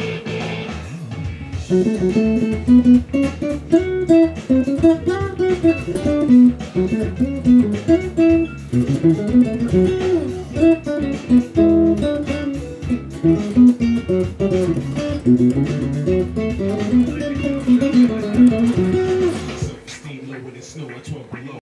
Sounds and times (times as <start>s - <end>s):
Electric guitar: 0.0s - 19.9s
Strum: 0.0s - 20.0s.